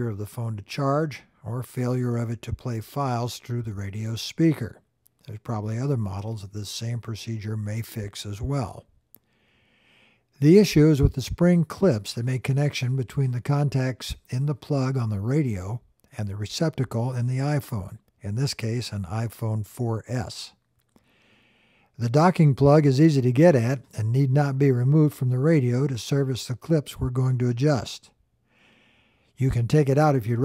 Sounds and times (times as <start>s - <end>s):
Speech: 0.0s - 8.9s, 10.4s - 20.6s, 22.0s - 28.2s, 29.4s - 30.4s.